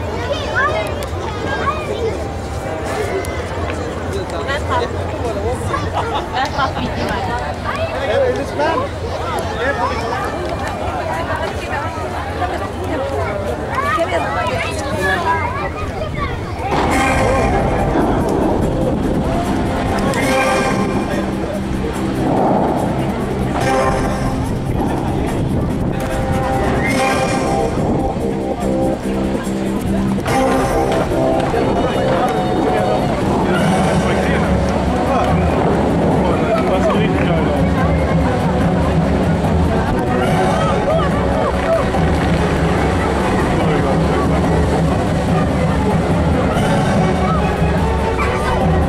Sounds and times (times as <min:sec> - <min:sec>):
Speech: 0:00.0 - 0:48.8
Music: 0:13.7 - 0:48.8.